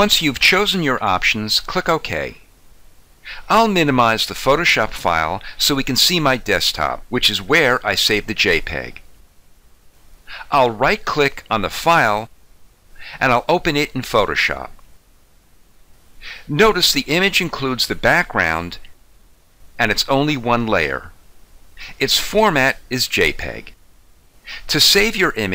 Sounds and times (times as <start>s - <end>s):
Speech: 0.0s - 2.5s, 3.3s - 9.0s, 10.3s - 12.3s, 13.0s - 14.8s, 16.4s - 19.0s, 19.8s - 21.2s, 21.8s - 23.8s, 24.6s - 25.5s
Inside, small room: 0.0s - 25.5s.